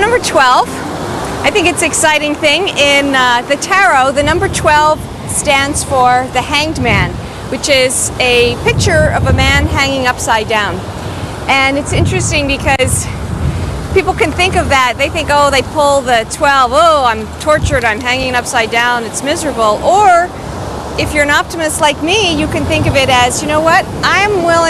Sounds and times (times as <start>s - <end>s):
Speech: 0.0s - 0.8s, 1.5s - 10.8s, 11.5s - 13.2s, 14.0s - 20.3s, 21.0s - 24.7s.